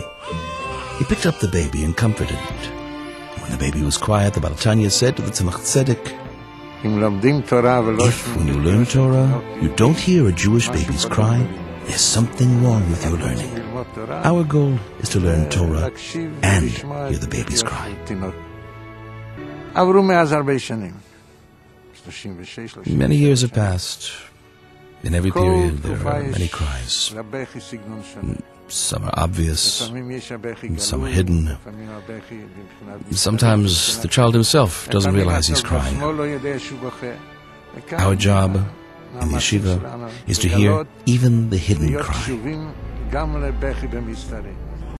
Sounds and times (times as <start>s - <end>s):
Speech: 0.0s - 2.7s, 3.4s - 6.2s, 6.8s - 18.4s, 19.8s - 21.0s, 22.0s - 24.3s, 25.0s - 37.2s, 37.8s - 44.6s
Music: 0.0s - 44.9s.